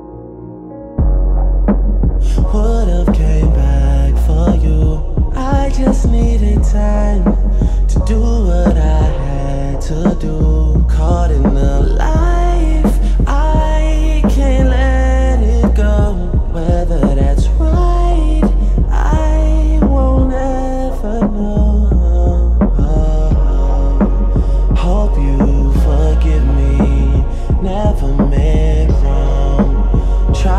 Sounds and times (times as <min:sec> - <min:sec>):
Music: 0:00.0 - 0:30.5.